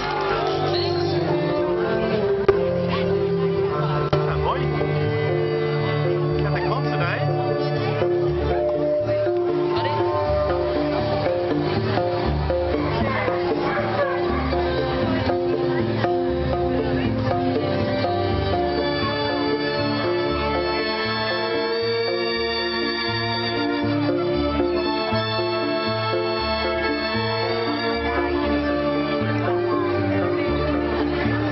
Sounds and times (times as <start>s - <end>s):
Music: 0.0s - 31.5s.